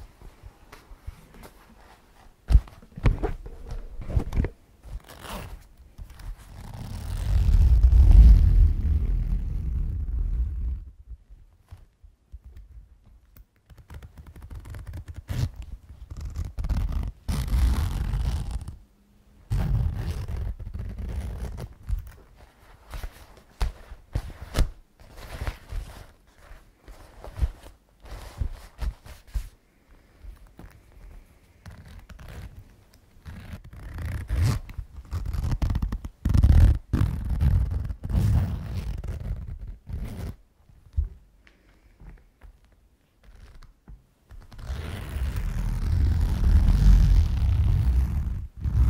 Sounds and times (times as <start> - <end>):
Zipper (clothing): 5.0 - 5.6, 6.4 - 10.8, 14.3 - 18.8, 19.5 - 21.7, 31.7 - 32.6, 33.2 - 40.4, 44.5 - 48.9.